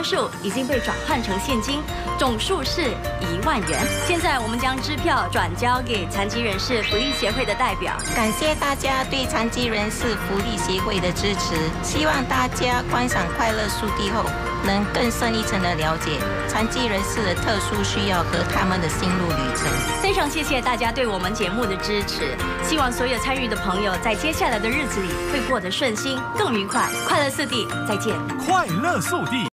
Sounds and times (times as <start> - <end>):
Music: 0.0 - 29.5.